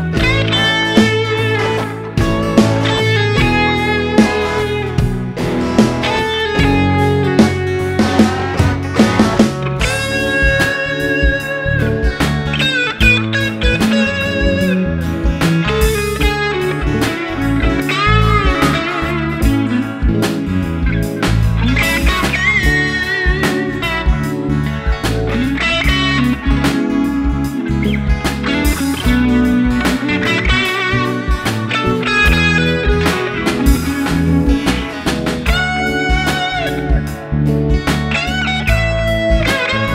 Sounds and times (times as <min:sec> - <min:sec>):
Steel guitar, slide guitar: 0:00.0 - 0:39.9.